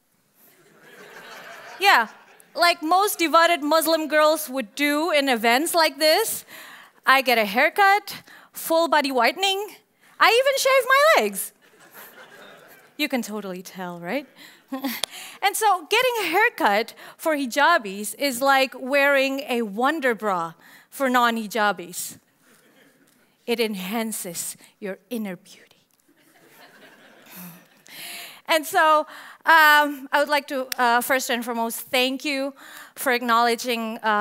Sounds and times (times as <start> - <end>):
Narration, monologue: 0.2 - 34.2
Female speech, woman speaking: 1.8 - 6.4, 7.1 - 11.5, 13.0 - 14.3, 15.4 - 22.2, 23.5 - 25.6, 28.5 - 34.2.